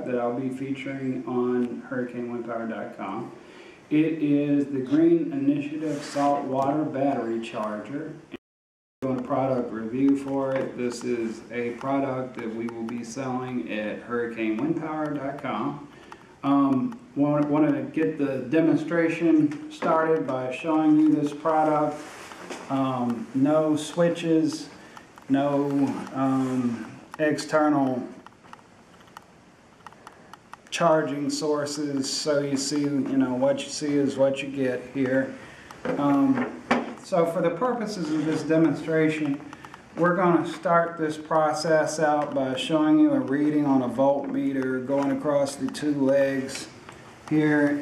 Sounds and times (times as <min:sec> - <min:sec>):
Speech: 0:00.0 - 0:08.4, 0:09.0 - 0:22.1, 0:22.7 - 0:28.2, 0:30.7 - 0:47.8.